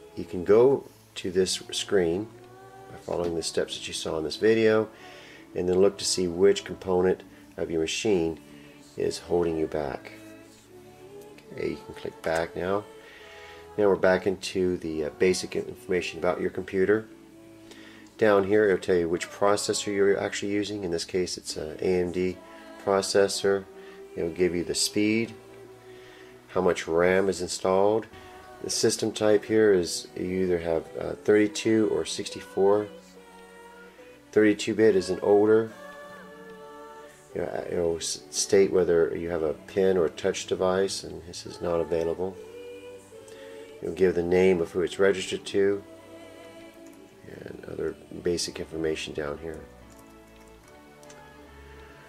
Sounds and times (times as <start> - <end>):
Music: 0.0 - 52.0
Speech: 0.1 - 2.3, 2.9 - 4.9, 5.6 - 8.4, 9.0 - 10.3, 11.5 - 12.9, 13.8 - 17.1, 18.2 - 25.4, 26.5 - 33.0, 34.3 - 35.8, 37.3 - 42.4, 43.8 - 45.8, 47.2 - 49.7.